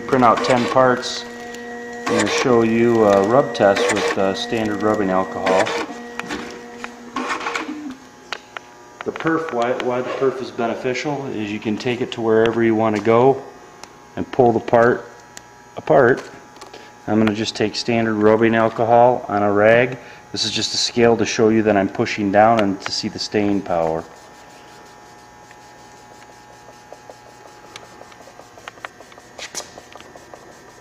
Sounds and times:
Speech: 0.0s - 1.3s, 2.1s - 5.8s, 9.0s - 13.5s, 14.2s - 15.1s, 15.8s - 16.3s, 17.1s - 24.1s.

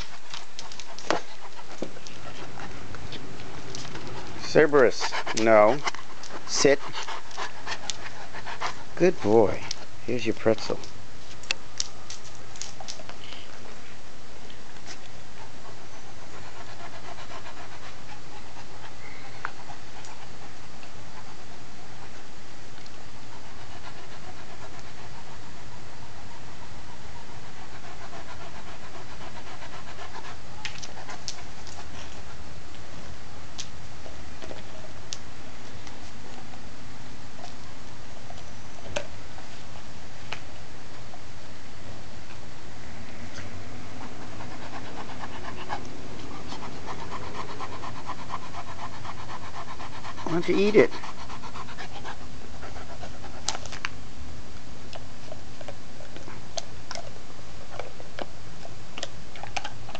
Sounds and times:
Domestic animals, pets: 14.5s - 22.2s.

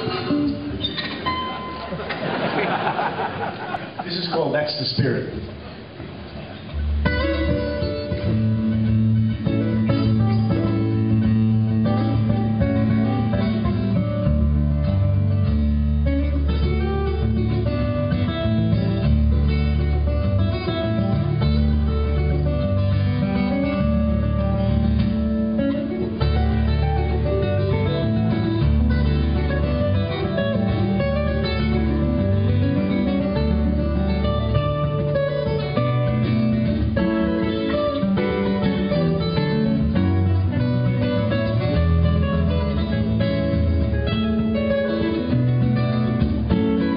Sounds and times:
Acoustic guitar: 0.0s - 46.9s.

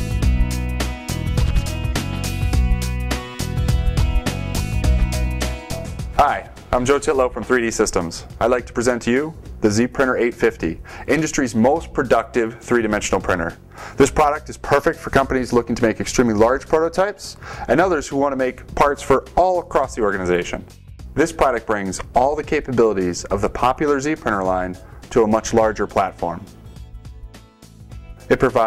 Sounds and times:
Music: 0.0s - 28.6s
Speech: 6.2s - 26.5s, 28.3s - 28.6s.

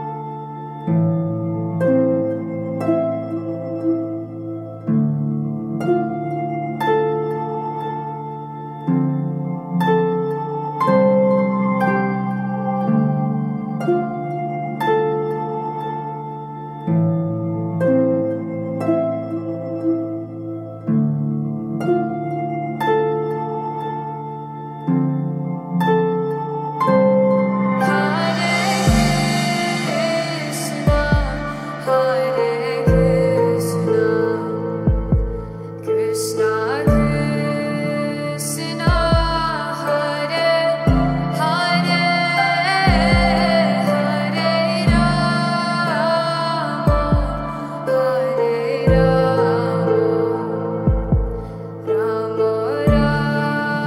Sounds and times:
Mantra: 27.8s - 34.9s, 35.9s - 50.8s, 51.9s - 53.8s.

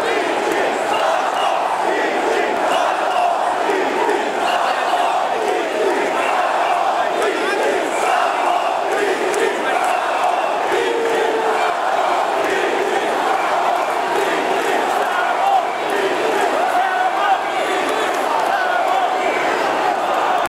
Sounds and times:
Speech: 0.0s - 20.5s.

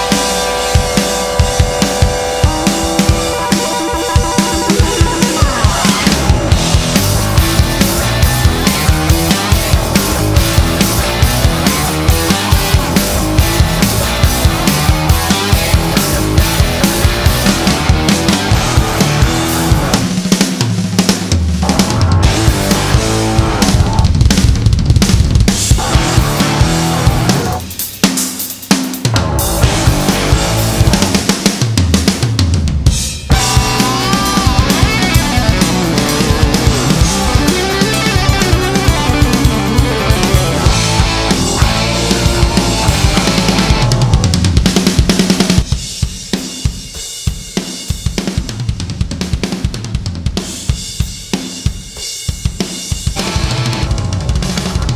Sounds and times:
Drum: 0.0s - 54.9s
Drum kit: 0.0s - 54.9s.

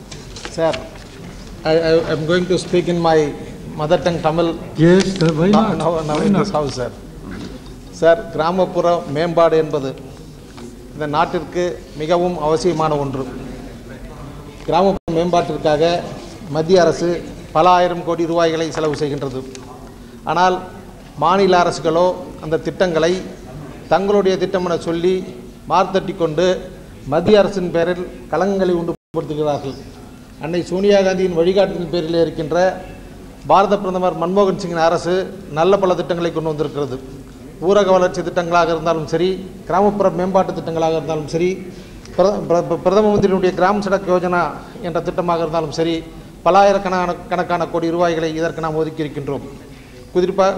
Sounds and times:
Narration, monologue: 0.0s - 50.5s
Male speech, man speaking: 0.5s - 1.0s, 1.6s - 7.0s, 8.0s - 10.1s, 11.0s - 19.6s, 20.3s - 37.0s, 37.6s - 49.5s, 50.1s - 50.5s.

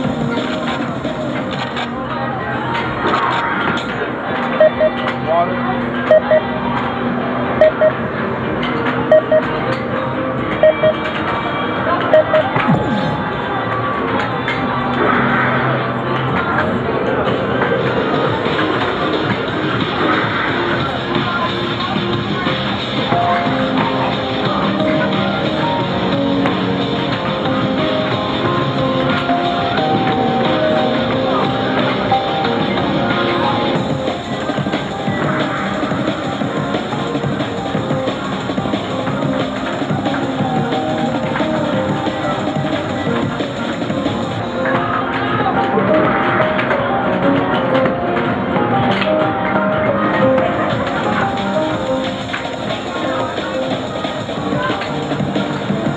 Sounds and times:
Music: 0.0s - 55.9s.

